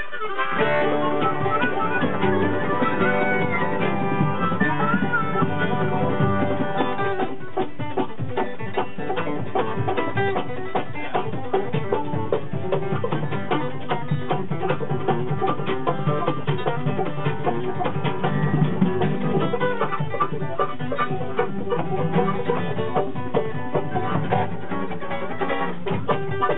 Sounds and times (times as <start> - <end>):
Bluegrass: 0.0 - 26.5.